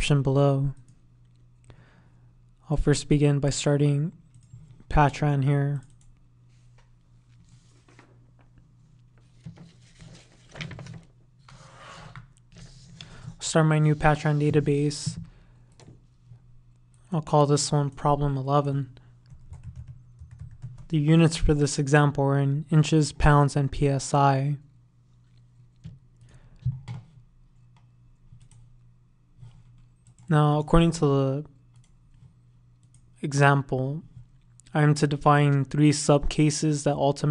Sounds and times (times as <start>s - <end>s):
Speech: 0.0s - 0.9s, 2.6s - 4.2s, 4.9s - 5.9s, 13.4s - 15.2s, 17.1s - 19.0s, 20.9s - 24.7s, 30.3s - 31.6s, 33.2s - 34.1s, 34.7s - 37.3s.